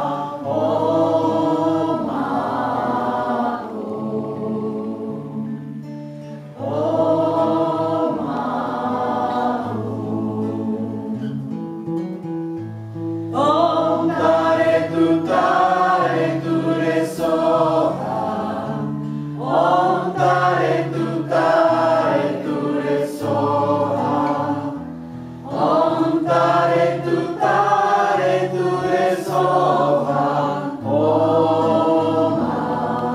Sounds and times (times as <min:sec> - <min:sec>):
Mantra: 0:00.0 - 0:05.9, 0:06.5 - 0:11.6, 0:13.3 - 0:24.8, 0:25.5 - 0:33.1
A capella: 0:00.0 - 0:12.1, 0:13.3 - 0:33.1.